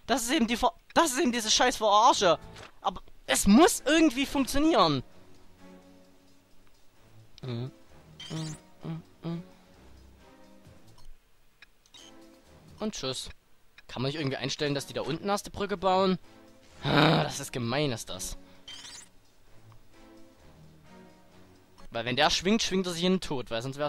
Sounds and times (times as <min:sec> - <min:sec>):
Speech: 0:00.1 - 0:05.0, 0:12.8 - 0:16.2, 0:16.9 - 0:18.4, 0:22.0 - 0:23.8
Music: 0:01.1 - 0:11.2, 0:11.9 - 0:13.3, 0:14.0 - 0:23.8.